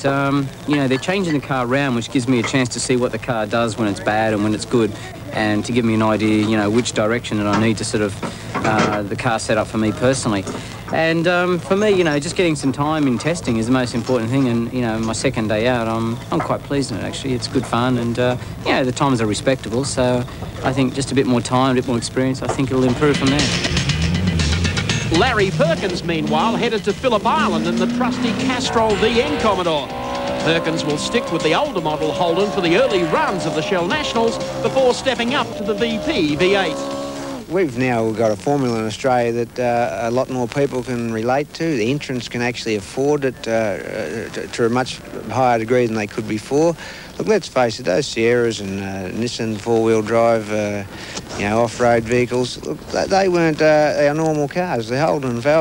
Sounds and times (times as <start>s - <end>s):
Speech: 0.0s - 23.6s, 25.1s - 36.8s, 37.5s - 55.6s.